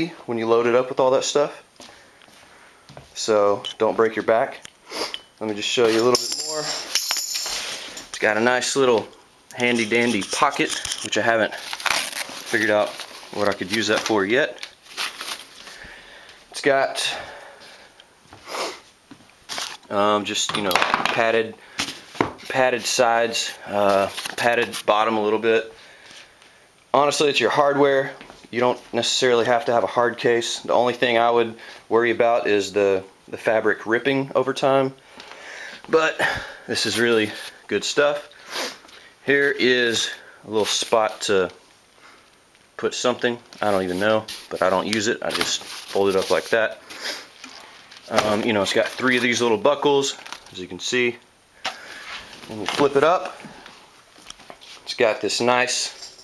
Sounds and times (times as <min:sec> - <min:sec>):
Speech: 0:00.0 - 0:01.6, 0:03.2 - 0:04.6, 0:05.4 - 0:06.9, 0:08.1 - 0:11.6, 0:12.5 - 0:14.7, 0:16.6 - 0:17.3, 0:19.9 - 0:21.6, 0:22.5 - 0:25.8, 0:26.9 - 0:35.0, 0:35.9 - 0:38.3, 0:39.2 - 0:41.6, 0:42.8 - 0:46.8, 0:48.1 - 0:51.2, 0:52.5 - 0:53.4, 0:54.9 - 0:56.0
Inside, small room: 0:00.0 - 0:56.2.